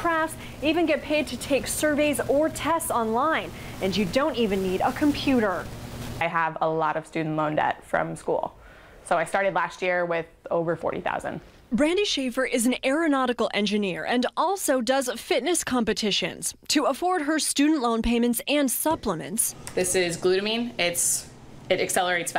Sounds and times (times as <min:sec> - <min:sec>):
Speech: 0:09.1 - 0:22.3.